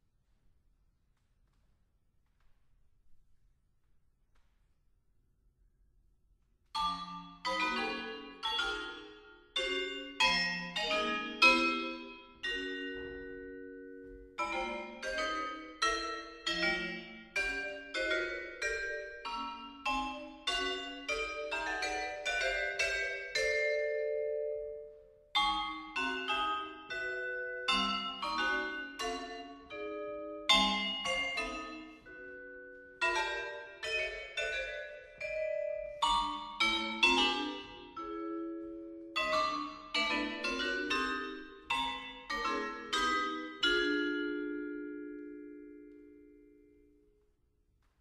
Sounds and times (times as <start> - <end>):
Marimba, xylophone: 6.8 - 46.8
Vibraphone: 6.8 - 47.0.